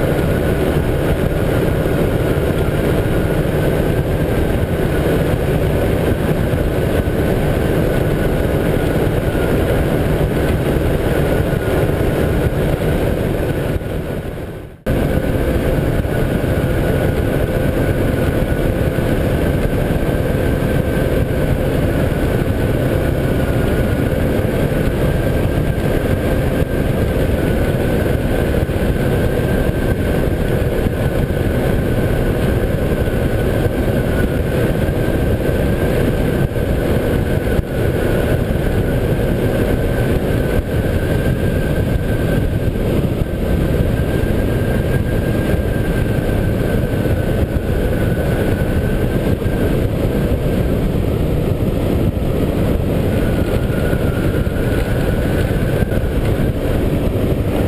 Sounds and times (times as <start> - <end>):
Engine: 0.0 - 57.6
Vehicle: 0.0 - 57.6.